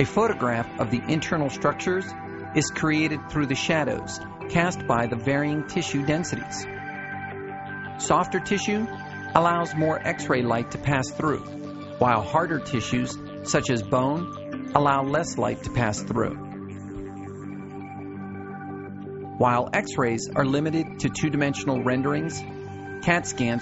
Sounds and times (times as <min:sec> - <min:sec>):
Speech: 0:00.0 - 0:06.7, 0:08.0 - 0:16.4, 0:19.4 - 0:23.6
Music: 0:00.0 - 0:23.6.